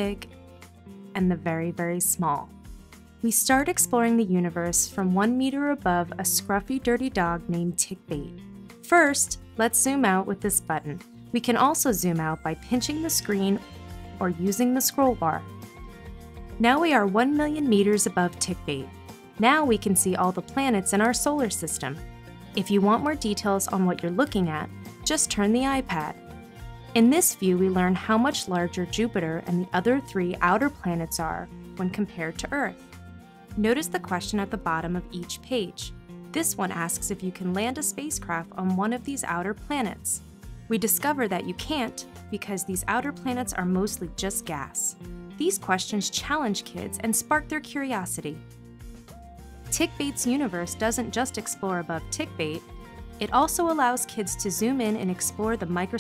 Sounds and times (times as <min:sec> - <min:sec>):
Speech: 0:00.0 - 0:00.3, 0:01.2 - 0:02.5, 0:03.2 - 0:13.6, 0:14.2 - 0:15.4, 0:16.6 - 0:22.0, 0:22.6 - 0:26.2, 0:27.0 - 0:32.8, 0:33.6 - 0:48.4, 0:49.7 - 0:52.6, 0:53.2 - 0:56.0
Music: 0:00.0 - 0:56.0.